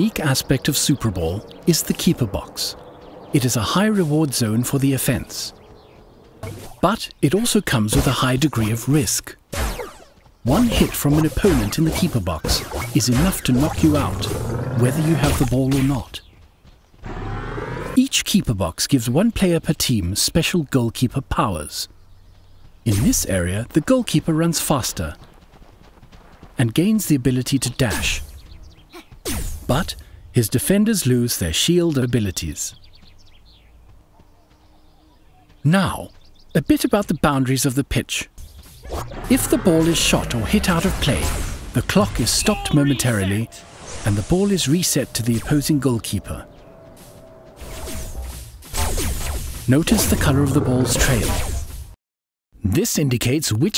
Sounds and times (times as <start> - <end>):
Speech: 0.0 - 5.6, 6.8 - 9.4, 10.5 - 16.2, 18.0 - 21.9, 22.9 - 25.3, 26.6 - 28.2, 29.7 - 32.8, 35.4 - 38.3, 39.3 - 46.5, 49.7 - 51.4, 52.6 - 53.7.